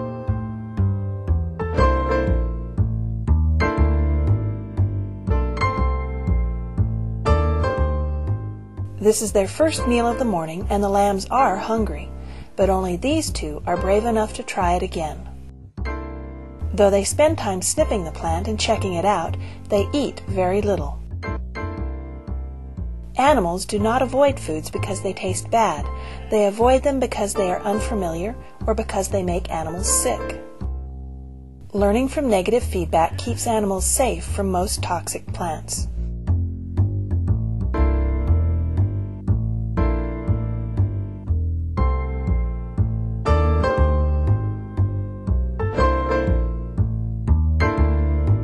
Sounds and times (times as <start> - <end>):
Music: 0.0 - 48.4
Speech: 9.0 - 15.3, 16.8 - 21.0, 23.2 - 30.4, 31.7 - 35.9.